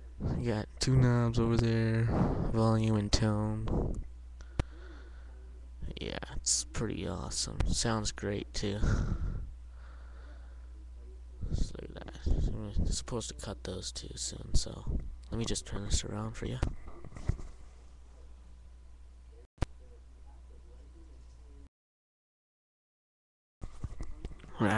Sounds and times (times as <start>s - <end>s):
Speech: 0.3s - 3.8s, 5.8s - 9.1s, 10.9s - 16.7s, 24.5s - 24.7s.